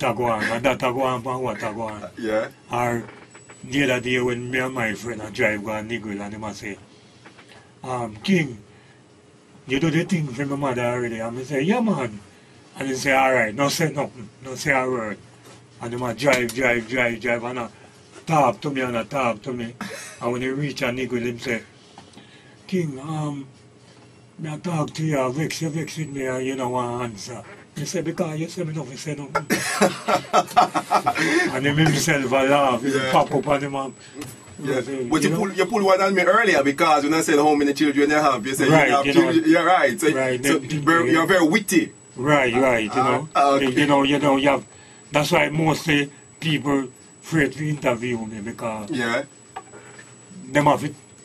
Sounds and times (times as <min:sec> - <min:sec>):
Speech: 0:00.0 - 0:06.8, 0:07.8 - 0:08.7, 0:09.7 - 0:12.2, 0:12.8 - 0:15.2, 0:15.8 - 0:21.7, 0:22.7 - 0:23.6, 0:24.4 - 0:29.5, 0:31.4 - 0:49.3, 0:50.4 - 0:51.0.